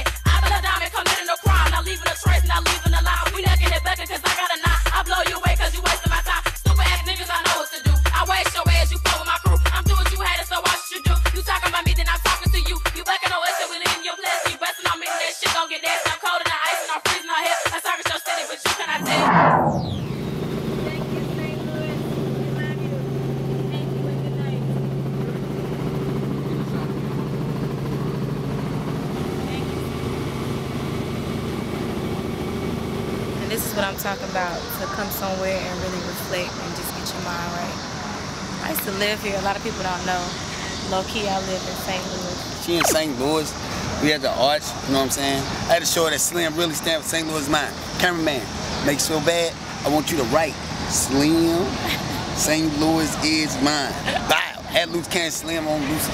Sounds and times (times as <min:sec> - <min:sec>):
Hip hop music: 0:00.0 - 0:20.1, 0:41.7 - 0:49.3, 0:49.9 - 0:56.1.